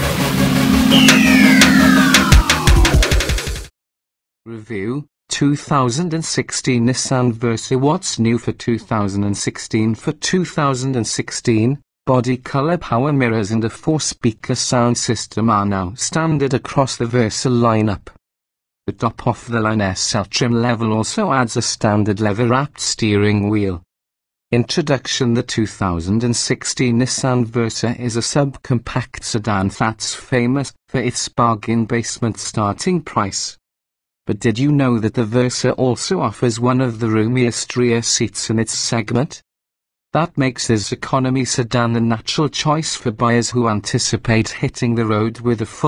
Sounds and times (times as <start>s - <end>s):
Speech: 4.5s - 18.2s, 18.9s - 23.9s, 24.5s - 33.6s, 34.3s - 39.4s, 40.2s - 45.8s.